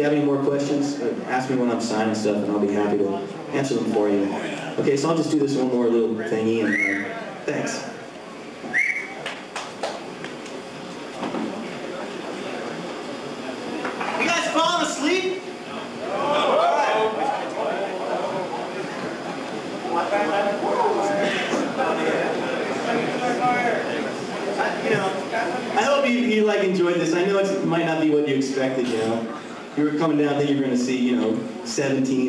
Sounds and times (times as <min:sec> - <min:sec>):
Speech: 0:00.0 - 0:08.1, 0:11.7 - 0:18.8, 0:19.8 - 0:32.2.